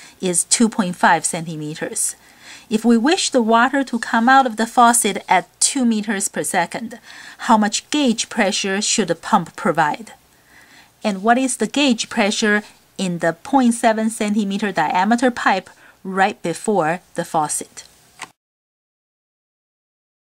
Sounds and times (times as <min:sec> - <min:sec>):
Speech: 0:00.2 - 0:10.2, 0:11.0 - 0:17.9.